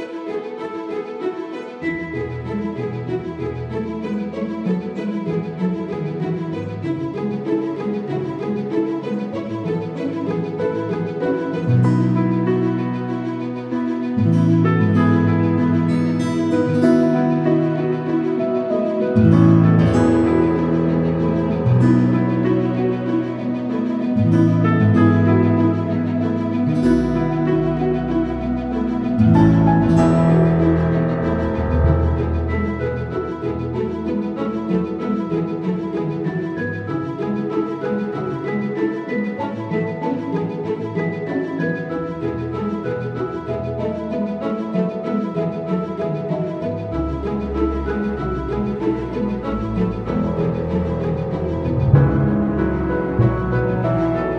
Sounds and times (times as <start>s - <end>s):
Music: 0.0s - 54.3s.